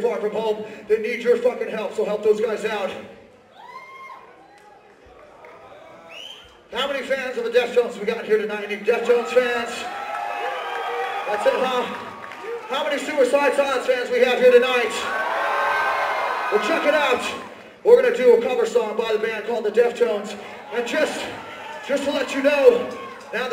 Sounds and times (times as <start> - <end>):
Speech: 0.0 - 3.1, 6.7 - 9.9, 11.3 - 12.0, 12.7 - 15.1, 16.6 - 23.5.